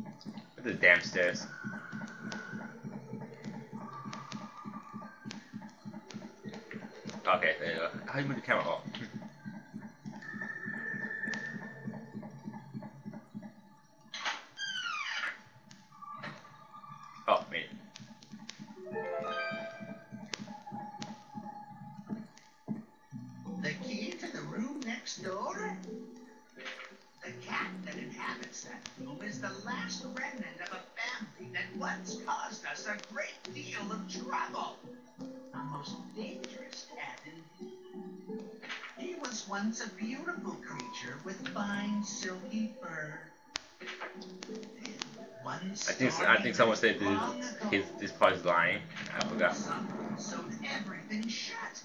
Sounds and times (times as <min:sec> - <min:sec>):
Music: 0:00.0 - 0:51.8
Speech: 0:00.6 - 0:01.5, 0:07.3 - 0:09.1, 0:17.3 - 0:17.7, 0:23.6 - 0:25.8, 0:27.2 - 0:34.8, 0:39.0 - 0:43.3, 0:44.8 - 0:51.8.